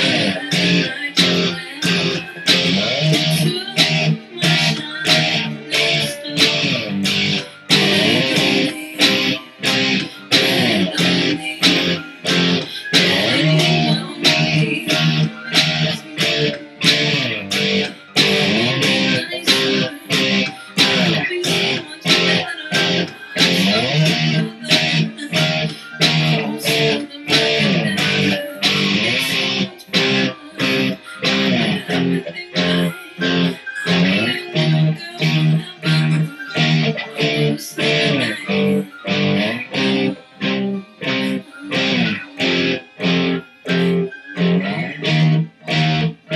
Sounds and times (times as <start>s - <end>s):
Electric guitar: 0.0s - 46.3s
Singing: 0.0s - 46.3s.